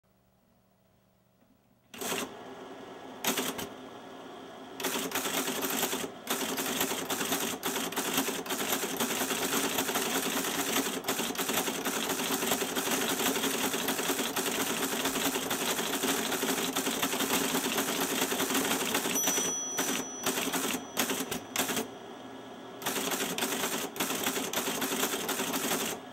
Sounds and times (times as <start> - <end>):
Typewriter: 1.9 - 2.3, 3.2 - 3.7, 4.8 - 21.9, 22.8 - 26.0.